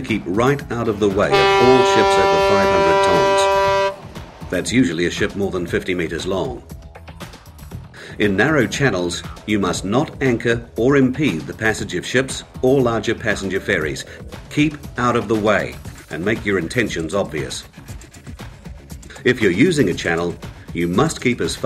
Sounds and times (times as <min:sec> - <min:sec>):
Speech: 0:00.0 - 0:03.6, 0:04.5 - 0:06.7, 0:08.1 - 0:17.7, 0:19.1 - 0:21.6
Music: 0:00.0 - 0:21.6.